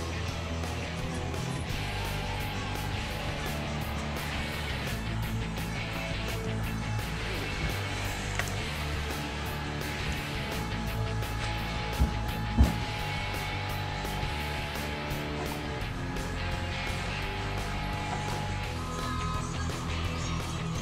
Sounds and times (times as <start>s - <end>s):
Music: 0.0s - 20.8s.